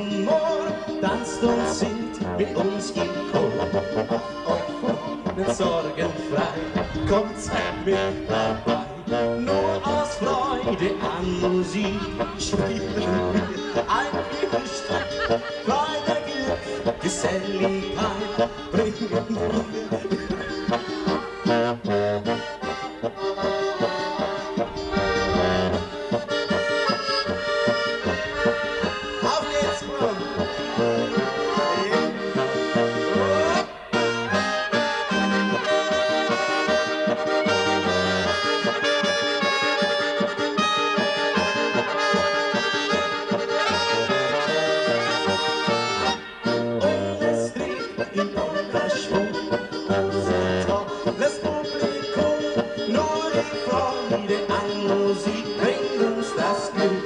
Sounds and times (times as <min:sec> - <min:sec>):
Music: 0:00.0 - 0:57.0.